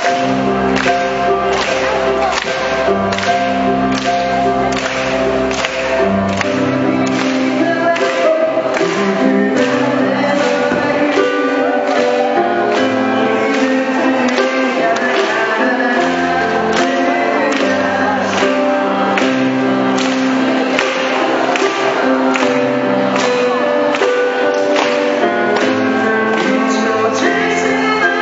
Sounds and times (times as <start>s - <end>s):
Music: 0.0s - 28.2s.